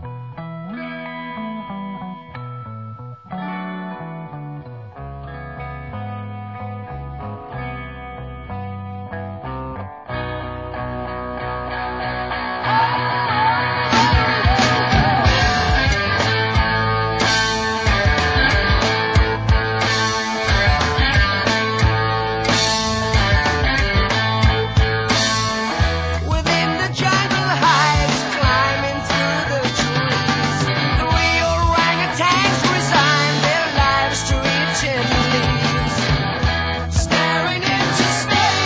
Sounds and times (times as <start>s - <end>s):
Music: 0.0s - 38.6s.